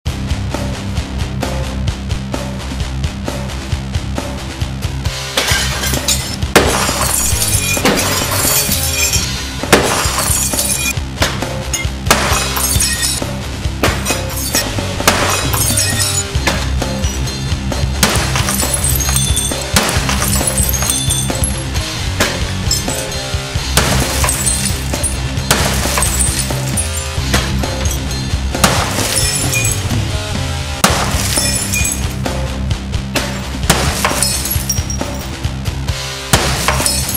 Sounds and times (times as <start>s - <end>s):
Music: 0.0s - 37.1s
Shatter: 5.3s - 11.0s, 11.7s - 13.2s, 13.8s - 30.1s, 30.8s - 32.4s, 33.2s - 35.4s, 36.4s - 37.1s.